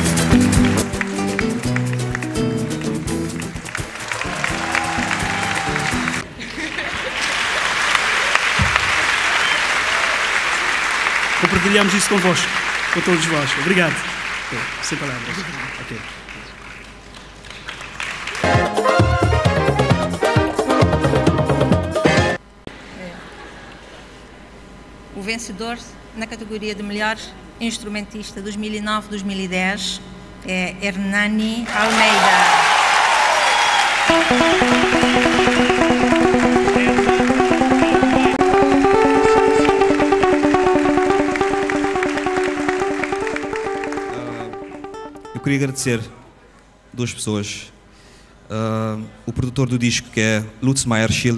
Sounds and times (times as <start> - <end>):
Speech: 11.4 - 16.1, 45.4 - 46.2, 47.0 - 47.8, 48.5 - 51.3.